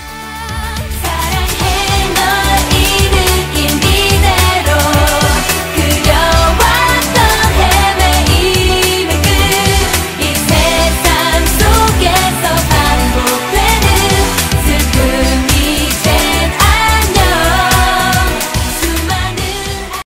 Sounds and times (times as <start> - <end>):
Music: 0.0 - 20.0.